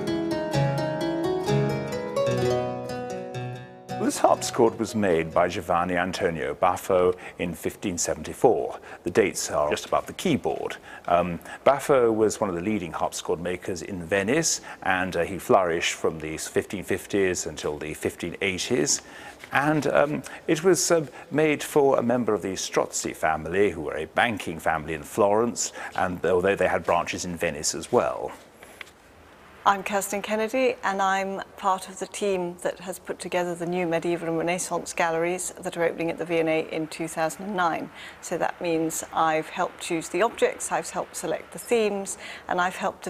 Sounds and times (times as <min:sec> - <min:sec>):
Speech: 0:04.0 - 0:28.4, 0:29.7 - 0:43.0.